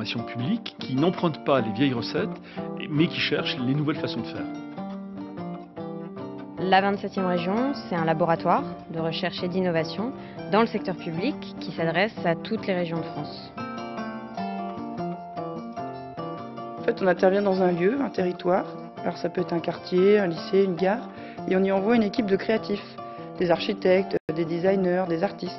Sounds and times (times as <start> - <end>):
Speech: 0.0 - 4.5, 6.6 - 13.5, 16.9 - 25.5
Music: 0.0 - 25.5.